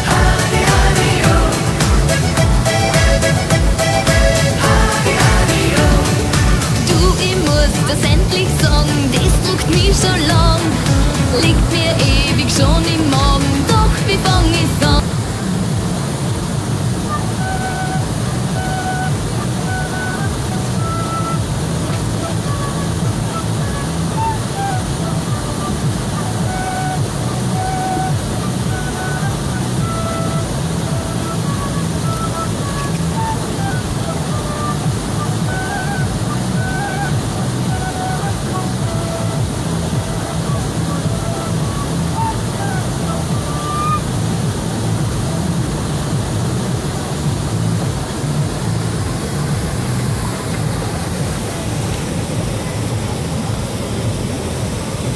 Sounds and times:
Music: 0.0s - 15.9s, 16.7s - 51.4s
Waterfall: 0.0s - 55.1s.

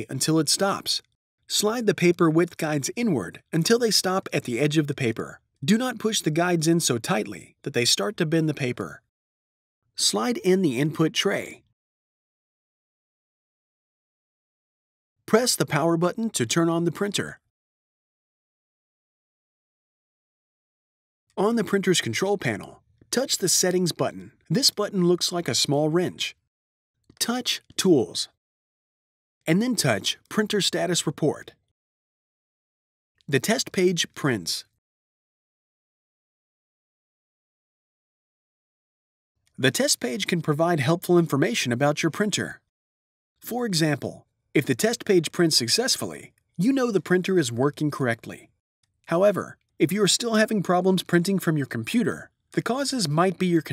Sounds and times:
Speech: 0.0s - 9.1s, 10.0s - 11.7s, 15.3s - 17.5s, 21.4s - 26.4s, 27.2s - 28.4s, 29.5s - 31.6s, 33.3s - 34.8s, 39.6s - 42.7s, 43.4s - 48.5s, 49.1s - 53.7s.

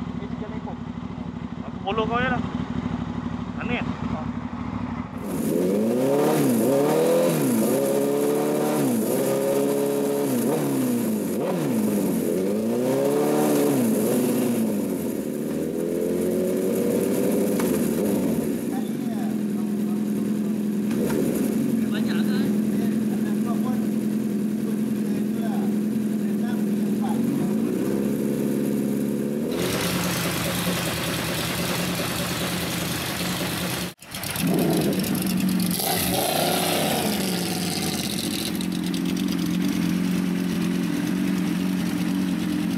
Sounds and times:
Motorcycle: 0.0s - 42.7s
Speech: 0.2s - 0.8s, 1.6s - 2.4s, 3.6s - 4.3s, 18.7s - 20.2s, 21.8s - 23.9s, 24.6s - 27.5s.

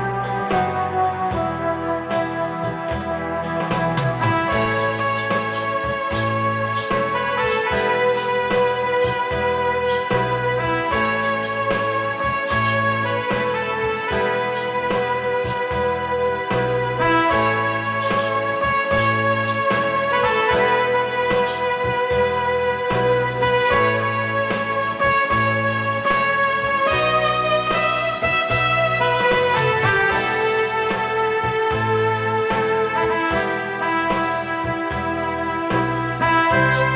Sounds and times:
Electric piano: 0.0s - 36.9s.

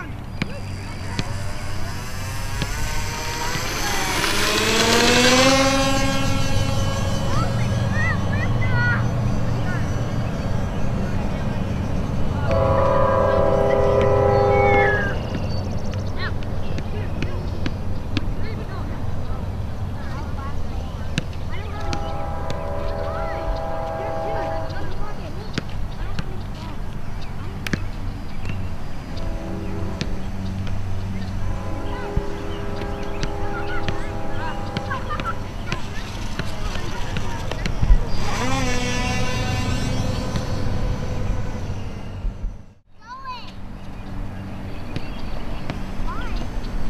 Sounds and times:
Speech: 16.1s - 27.8s, 31.9s - 38.5s.

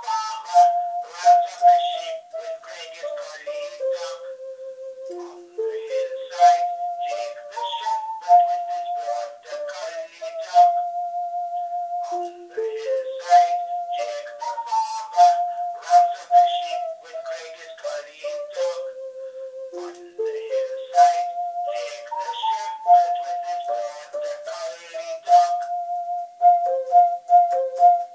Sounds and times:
Inside, small room: 0.0s - 28.1s
Musical instrument: 0.0s - 28.1s
Speech: 1.1s - 4.3s, 5.2s - 10.8s, 12.0s - 19.0s, 19.8s - 25.7s.

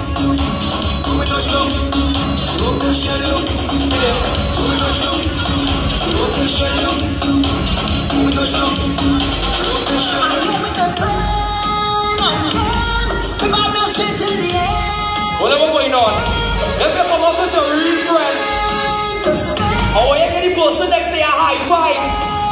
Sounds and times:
Music: 0.0s - 22.5s.

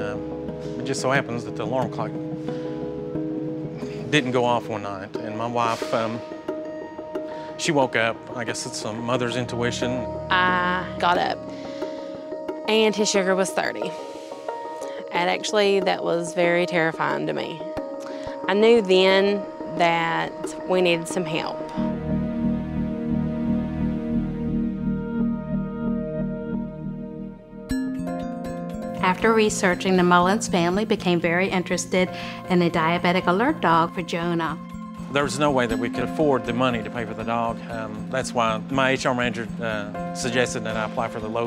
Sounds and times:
Music: 0.0s - 41.4s.

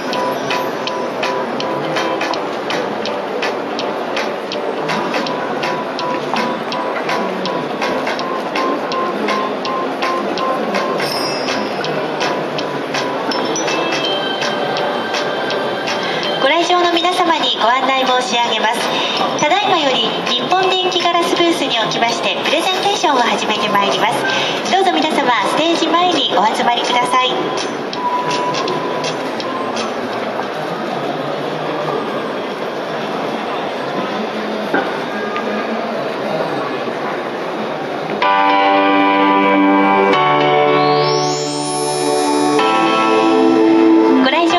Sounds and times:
Music: 0.0s - 30.1s, 38.2s - 44.5s
Speech: 16.3s - 27.6s.

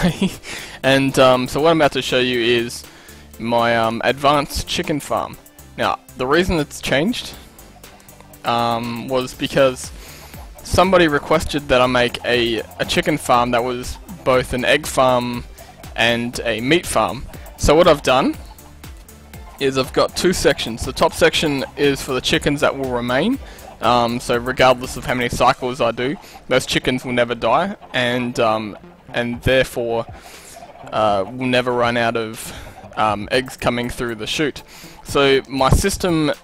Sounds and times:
Cluck: 9.6s - 18.8s, 19.4s - 36.4s.

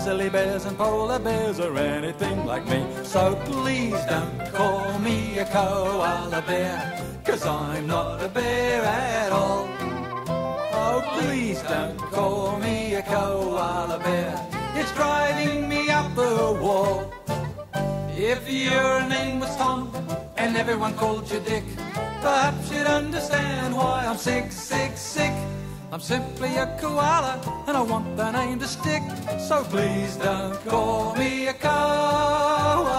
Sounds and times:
Music: 0.0s - 32.9s.

